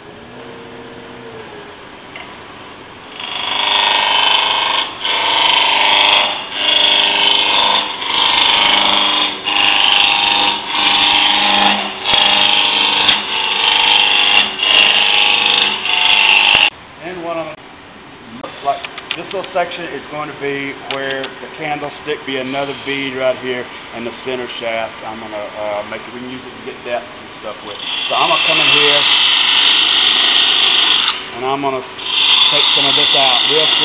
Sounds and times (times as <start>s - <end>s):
Power tool: 3.1s - 16.8s, 27.6s - 33.8s.